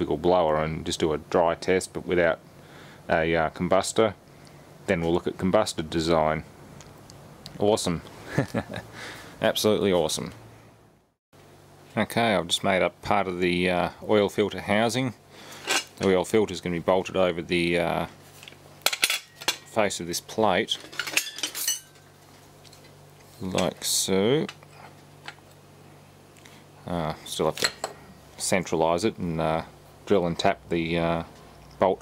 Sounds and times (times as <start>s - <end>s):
Speech: 0.0s - 2.4s, 3.1s - 4.2s, 4.9s - 6.5s, 7.5s - 8.1s, 9.4s - 10.4s, 11.9s - 15.2s, 16.0s - 18.2s, 19.7s - 20.8s, 23.4s - 24.6s, 26.8s - 27.8s, 28.4s - 32.0s.